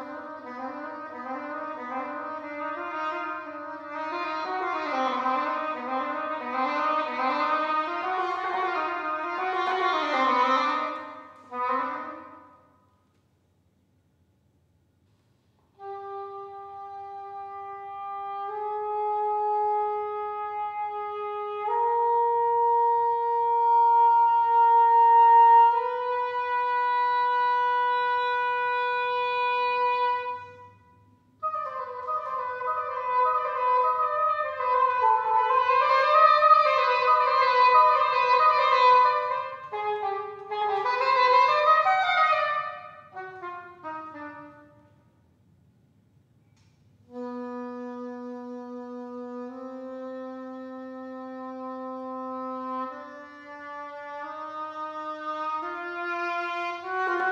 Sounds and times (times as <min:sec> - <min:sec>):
Wind instrument, woodwind instrument: 0:00.0 - 0:13.0, 0:15.6 - 0:45.1, 0:46.4 - 0:57.3.